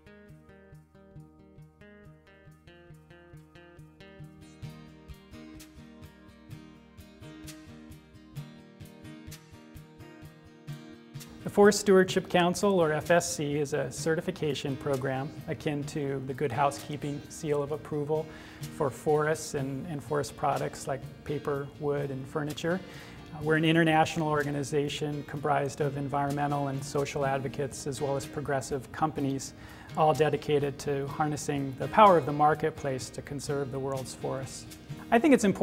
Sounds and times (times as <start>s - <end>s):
Music: 0.0s - 35.6s
Speech: 11.4s - 22.8s, 23.4s - 35.6s.